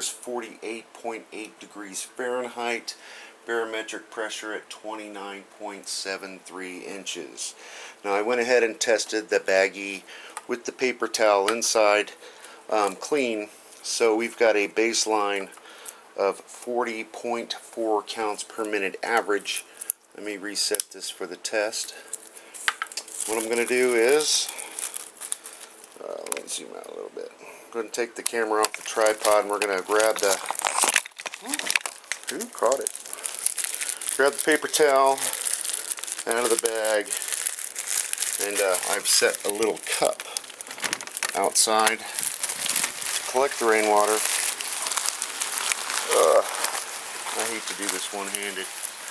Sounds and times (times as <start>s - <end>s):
Speech: 0.0s - 15.6s, 16.2s - 19.6s, 20.2s - 22.0s, 23.3s - 24.6s, 26.0s - 30.4s, 32.3s - 32.9s, 34.2s - 35.4s, 36.3s - 37.1s, 38.4s - 40.3s, 41.3s - 42.2s, 43.3s - 44.3s, 46.1s - 46.5s, 47.3s - 48.7s.